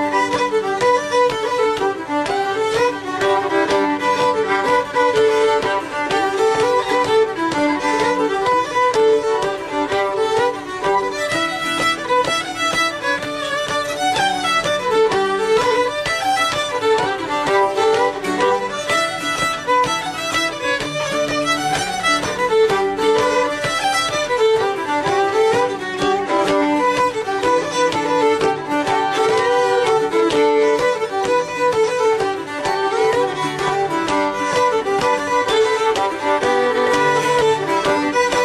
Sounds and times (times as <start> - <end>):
Violin, fiddle: 0.0 - 38.4.